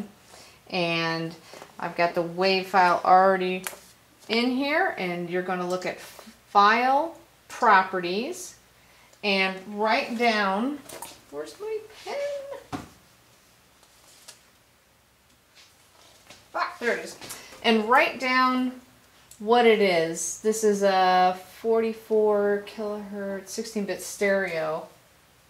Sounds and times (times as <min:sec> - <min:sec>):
Speech: 0:00.7 - 0:03.7, 0:04.3 - 0:06.0, 0:06.6 - 0:08.6, 0:09.2 - 0:12.7, 0:16.5 - 0:18.8, 0:19.4 - 0:25.0.